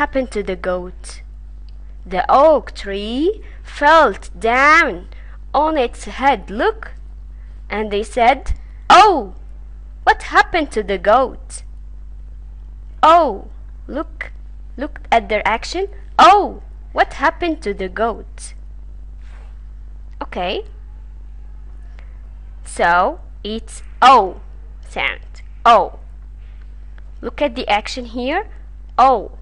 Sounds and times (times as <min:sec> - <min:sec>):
Speech: 0:00.0 - 0:01.3, 0:02.1 - 0:07.0, 0:07.7 - 0:09.4, 0:10.1 - 0:11.7, 0:13.0 - 0:18.6, 0:20.2 - 0:20.7, 0:22.6 - 0:26.0, 0:27.2 - 0:29.4.